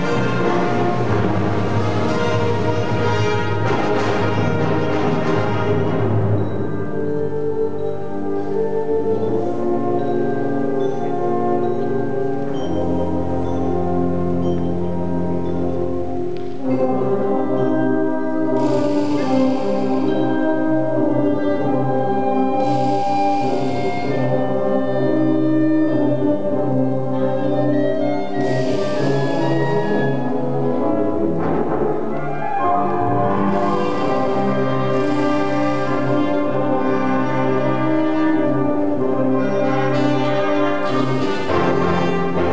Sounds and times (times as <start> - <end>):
Orchestra: 0.0 - 42.5.